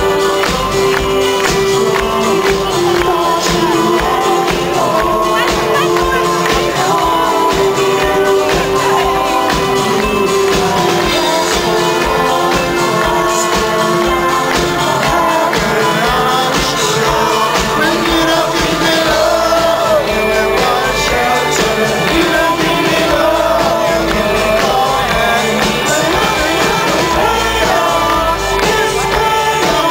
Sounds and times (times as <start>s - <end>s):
Inside, large room or hall: 0.0s - 29.9s
Music: 0.0s - 29.9s
Singing: 0.0s - 29.9s.